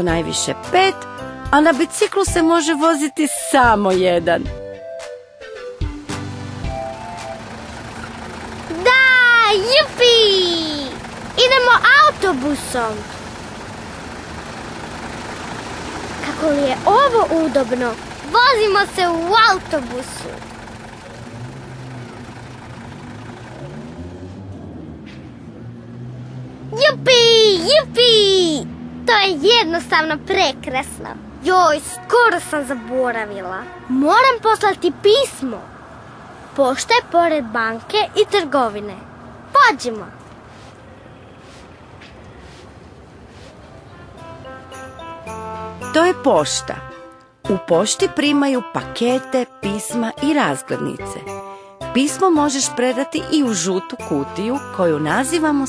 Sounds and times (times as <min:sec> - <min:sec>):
Child speech, kid speaking: 0:00.0 - 0:01.0, 0:01.6 - 0:04.5, 0:08.7 - 0:13.1, 0:16.2 - 0:20.4, 0:26.7 - 0:35.7, 0:36.6 - 0:40.2, 0:47.5 - 0:51.3, 0:52.0 - 0:55.6
Music for children: 0:00.0 - 0:10.9, 0:43.8 - 0:55.6.